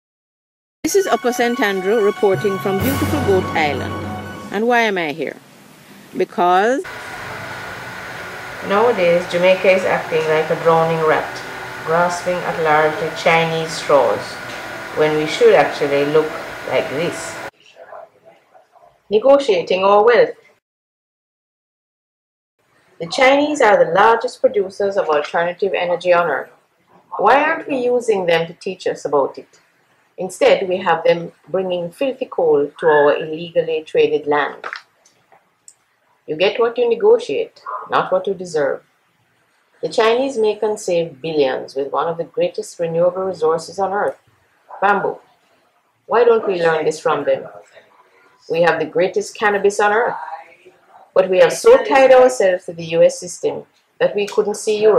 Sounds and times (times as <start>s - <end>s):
Speech: 0.9s - 5.4s, 6.2s - 6.9s, 8.6s - 20.4s, 23.0s - 26.5s, 27.1s - 29.5s, 30.2s - 34.7s, 36.3s - 38.8s, 39.8s - 45.2s, 46.1s - 54.9s.